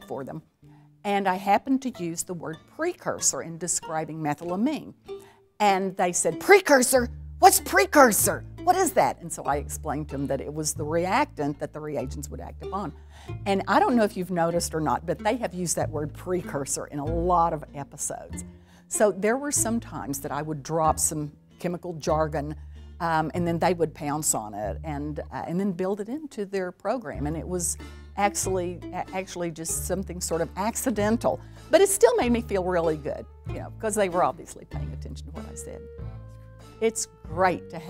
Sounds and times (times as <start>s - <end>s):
Speech: 0.0s - 0.4s, 1.1s - 5.0s, 5.6s - 12.9s, 13.5s - 35.8s, 36.8s - 37.9s
Music: 0.0s - 37.9s.